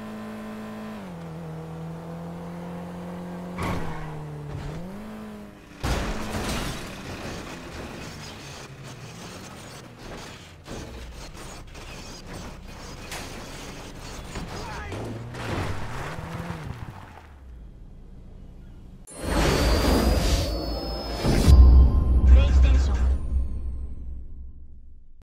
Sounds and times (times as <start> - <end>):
Car: 0.0 - 21.6
Music: 20.0 - 25.1.